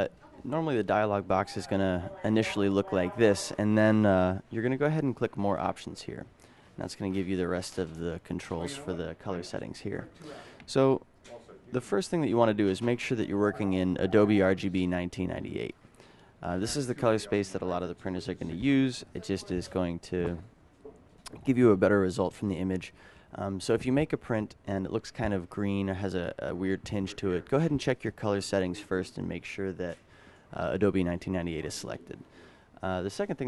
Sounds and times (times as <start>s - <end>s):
Speech: 0.0s - 15.8s, 16.4s - 20.5s, 21.3s - 33.4s.